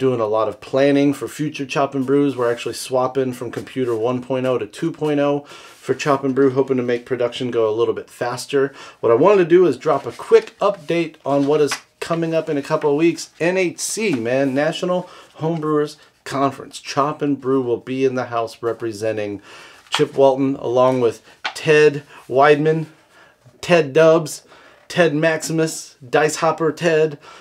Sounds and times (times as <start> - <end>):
Speech: 0.0 - 23.0, 23.6 - 27.2.